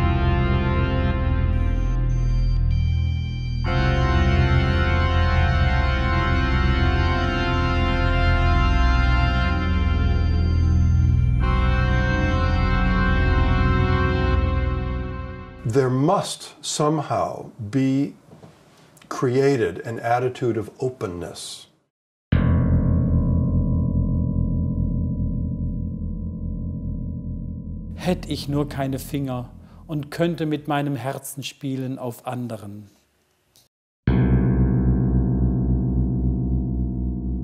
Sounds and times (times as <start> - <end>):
Music: 0.0 - 15.7, 22.4 - 30.2, 34.1 - 37.4
Speech: 15.6 - 18.2, 19.1 - 21.8, 28.0 - 32.9.